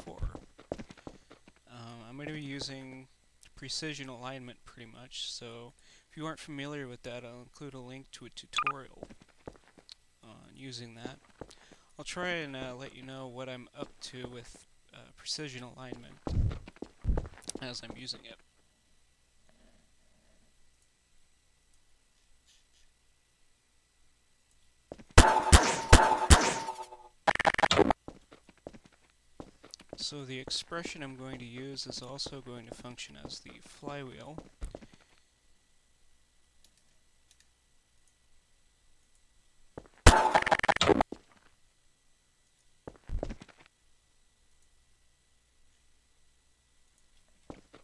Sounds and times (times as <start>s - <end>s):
Speech: 0.0s - 0.4s, 1.7s - 9.1s, 10.2s - 11.2s, 12.0s - 16.3s, 17.5s - 18.4s, 30.0s - 34.5s.